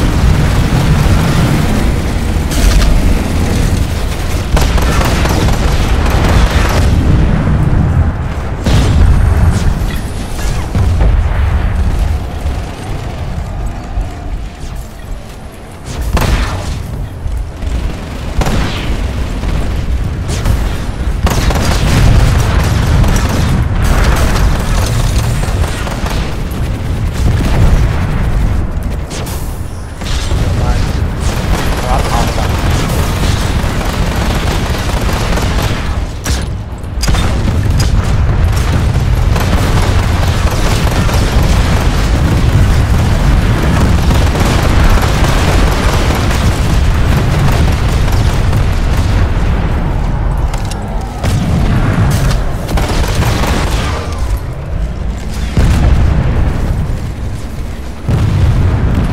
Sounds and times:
Speech: 30.4 - 30.9, 31.8 - 32.6.

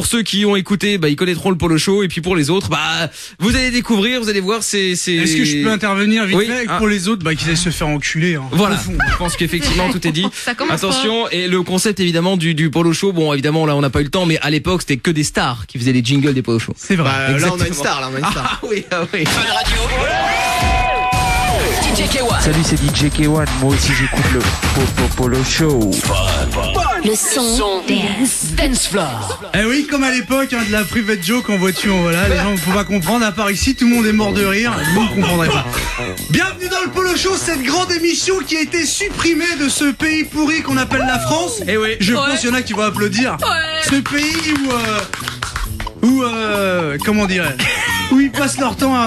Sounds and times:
Speech: 0.0 - 20.0, 21.9 - 35.6, 36.3 - 45.1
Music: 3.4 - 11.4, 19.3 - 49.0.

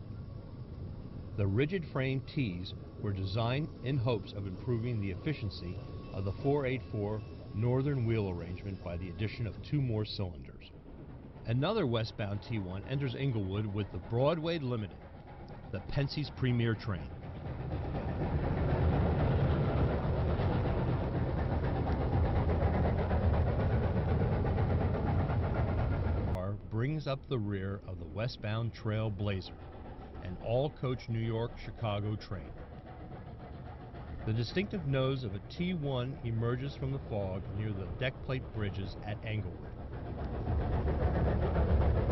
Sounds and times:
Speech: 1.4 - 10.7, 11.5 - 14.9, 15.7 - 17.1, 26.4 - 29.6, 30.2 - 32.6, 34.3 - 39.7.

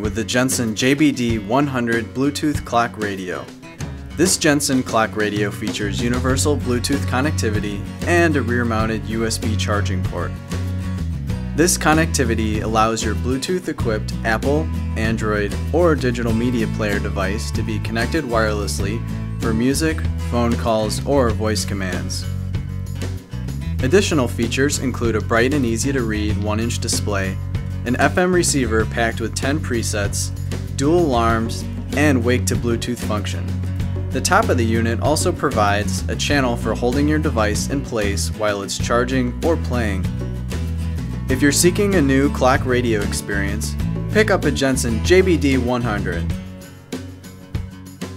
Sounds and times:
Speech: 0.0 - 3.5, 4.2 - 10.4, 11.6 - 22.3, 23.8 - 33.5, 34.2 - 40.1, 41.3 - 46.4
Music: 0.0 - 48.1.

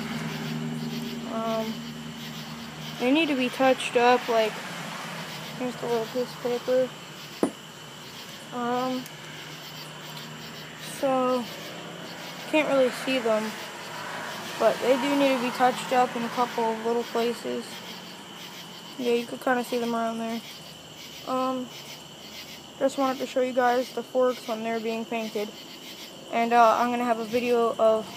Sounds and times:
Speech: 1.3 - 1.8, 3.0 - 4.6, 5.6 - 6.9, 8.6 - 9.0, 10.8 - 11.5, 12.5 - 13.6, 14.6 - 17.8, 19.0 - 20.4, 21.3 - 21.7, 22.8 - 25.5, 26.3 - 28.1.

